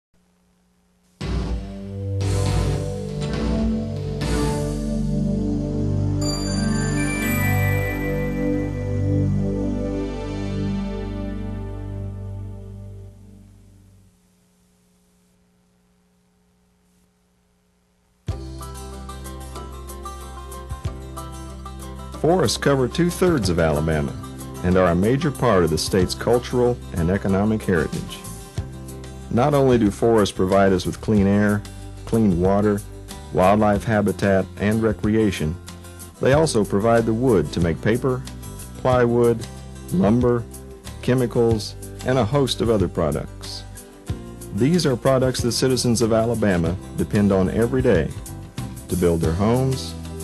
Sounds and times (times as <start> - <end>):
Music: 1.2 - 14.1, 18.3 - 50.2.